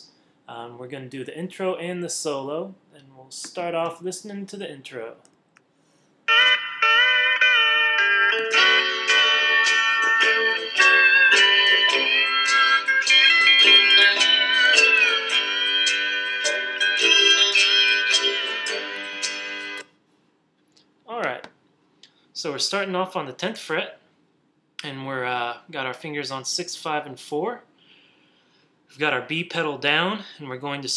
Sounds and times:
Speech: 0.0 - 5.3, 21.1 - 21.5, 22.4 - 24.0, 24.8 - 27.7, 29.0 - 30.9.

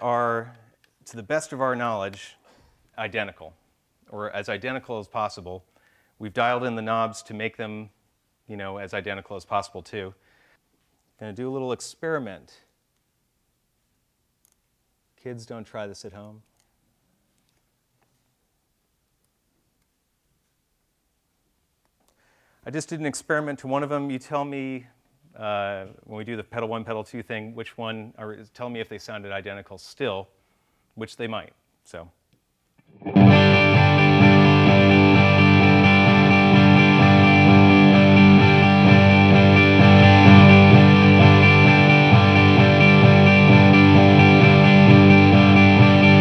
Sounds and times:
Speech: 0.0 - 2.4, 3.0 - 10.2, 11.2 - 12.7, 15.2 - 16.4, 22.7 - 30.4, 31.0 - 32.2.

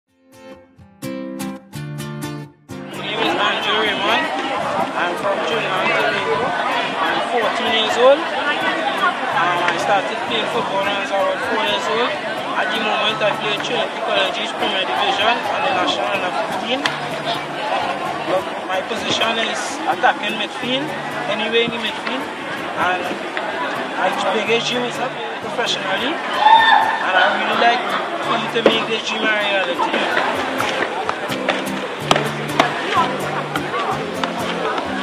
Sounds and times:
Music: 0.1 - 35.0
Chatter: 2.8 - 35.0
Speech: 3.0 - 26.2, 27.0 - 31.5, 32.1 - 35.0.

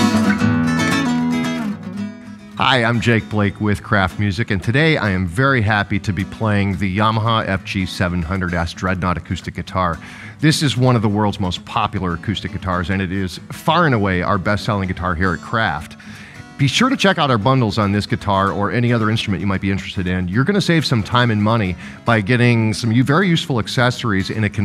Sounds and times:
Music: 0.0 - 24.6
Speech: 2.6 - 24.6.

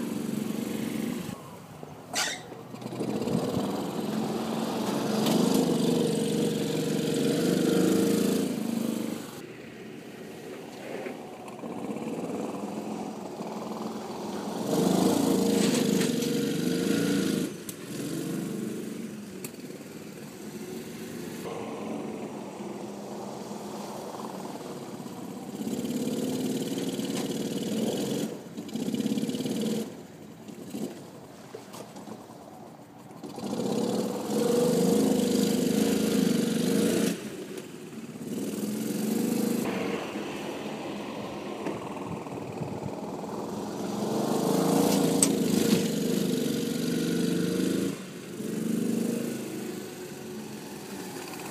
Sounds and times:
Car: 0.0 - 51.5.

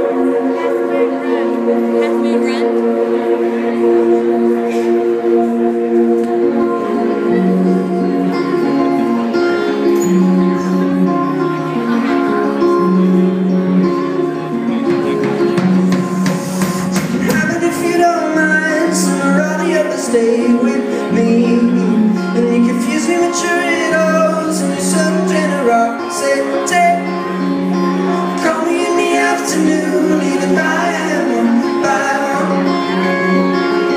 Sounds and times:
Music: 0.0 - 33.9.

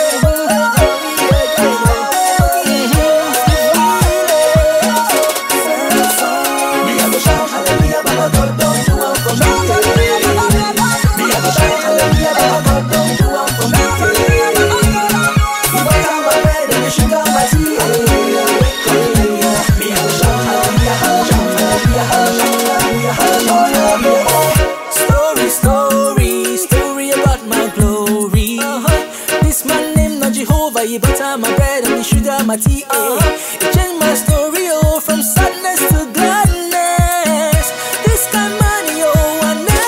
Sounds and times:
Music: 0.0 - 39.8.

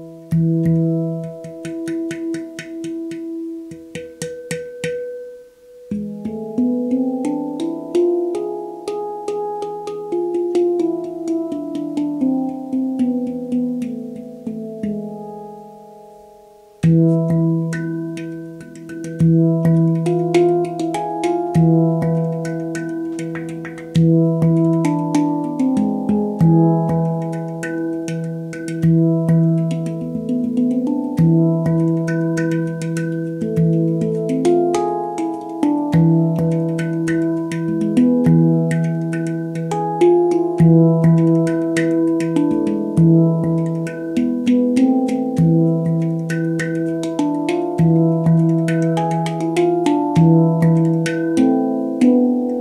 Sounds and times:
Music: 0.0 - 52.6.

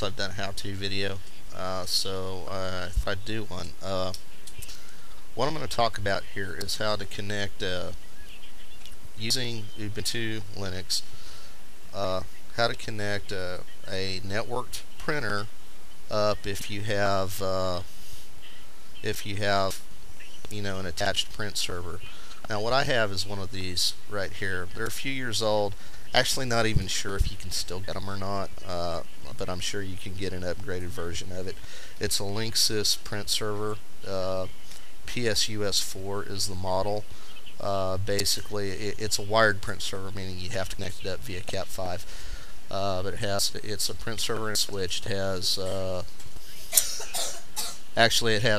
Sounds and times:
Speech: 0.0 - 4.7, 5.4 - 8.0, 9.2 - 11.1, 11.9 - 15.5, 16.1 - 17.9, 19.0 - 19.8, 20.5 - 34.5, 35.1 - 42.1, 42.7 - 46.1, 48.0 - 48.5.

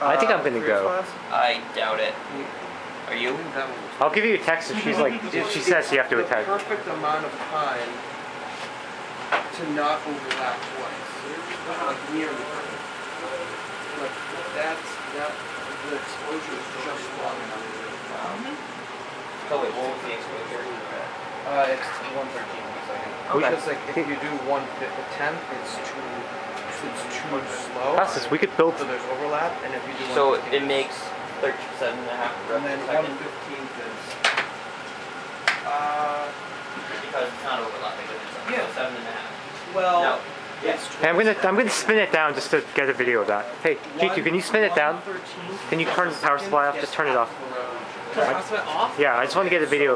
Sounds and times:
Speech: 0.0 - 8.0, 9.5 - 18.6, 19.5 - 34.2, 35.7 - 36.4, 37.0 - 49.9.

